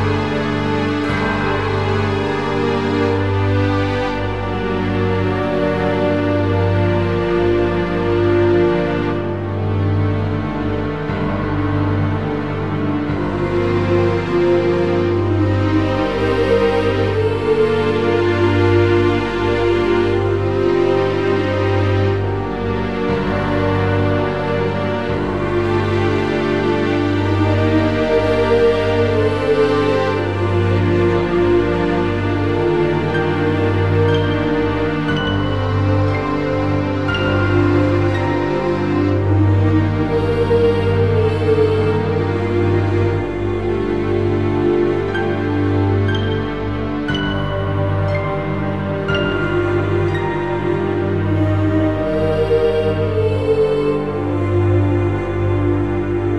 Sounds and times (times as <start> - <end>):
Music: 0.0 - 56.3.